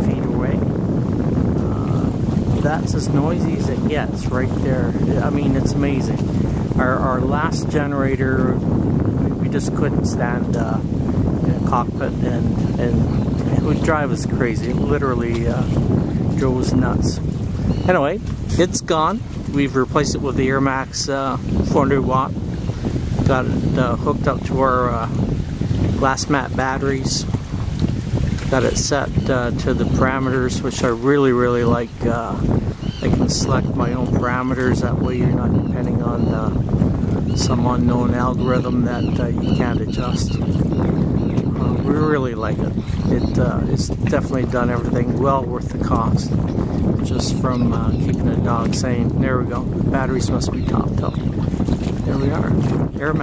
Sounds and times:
Wind noise (microphone): 0.0s - 53.2s.

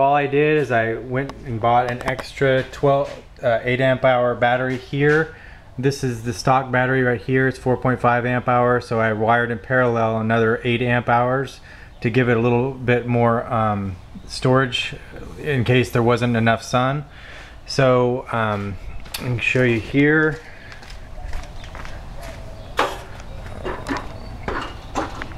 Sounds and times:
Speech: 0.0s - 17.1s, 17.7s - 20.4s.

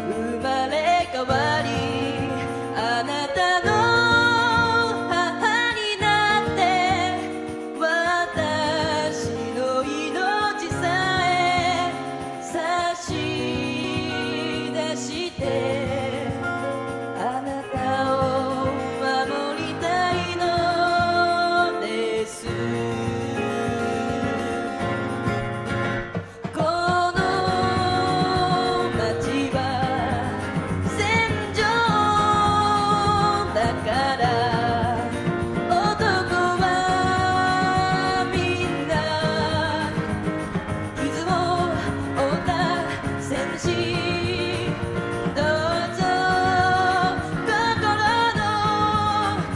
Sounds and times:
Music: 0.0s - 49.5s.

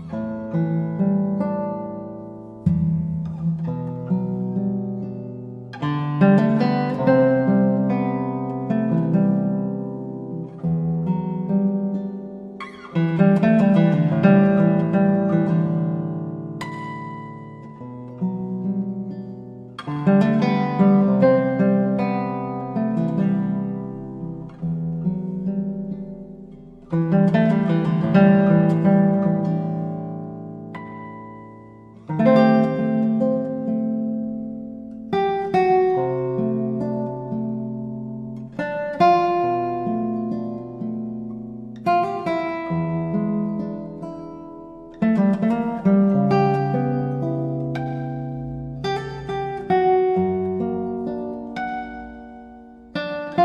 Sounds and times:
Acoustic guitar: 0.0s - 53.4s.

